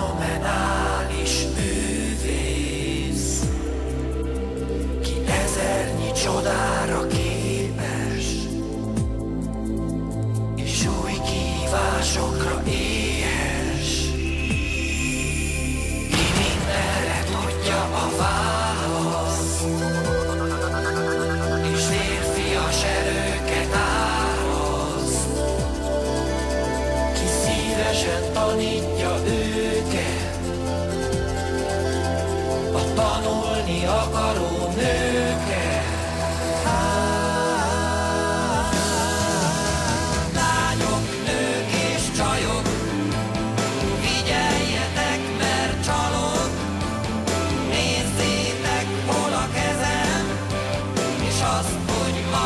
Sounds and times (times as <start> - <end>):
Music: 0.0 - 52.4.